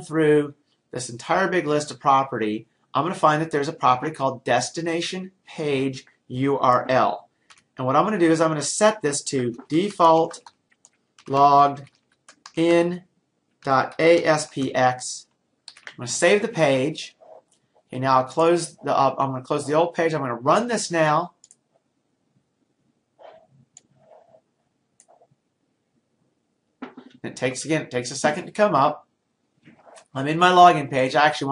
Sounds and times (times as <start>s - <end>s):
Speech: 0.0s - 10.4s, 11.3s - 11.9s, 12.5s - 17.2s, 17.9s - 21.4s, 26.8s - 29.1s, 30.0s - 31.5s.